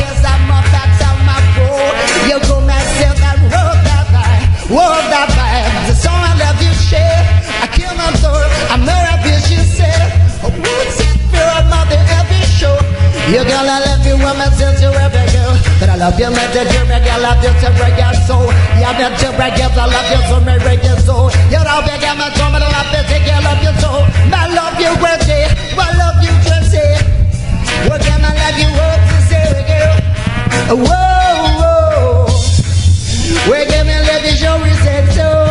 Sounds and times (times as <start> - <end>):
Music: 0.0 - 35.5.